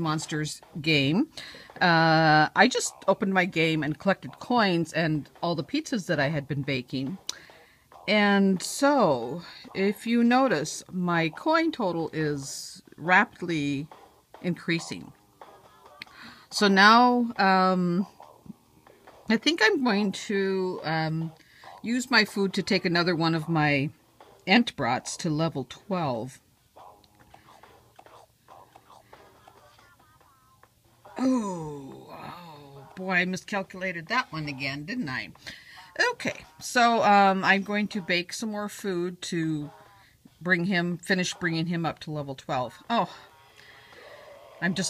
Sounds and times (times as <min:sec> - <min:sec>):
Speech: 0:00.0 - 0:07.2, 0:08.1 - 0:15.1, 0:16.5 - 0:18.1, 0:19.3 - 0:23.9, 0:24.5 - 0:26.4, 0:31.2 - 0:39.8, 0:40.4 - 0:43.2, 0:44.6 - 0:44.9.